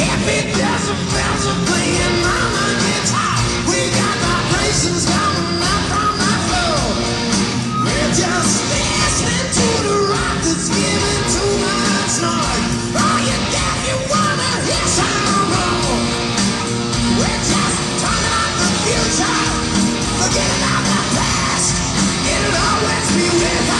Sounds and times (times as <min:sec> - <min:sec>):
Rock music: 0:00.0 - 0:23.7.